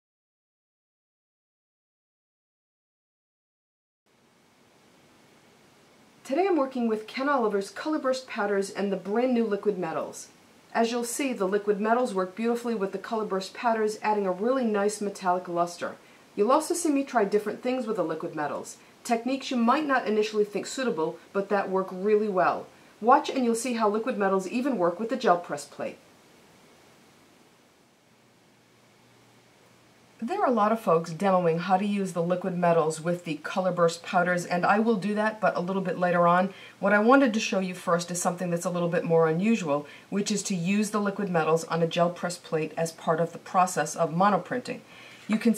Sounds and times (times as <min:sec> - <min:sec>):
Speech: 0:06.3 - 0:26.0, 0:30.2 - 0:45.5.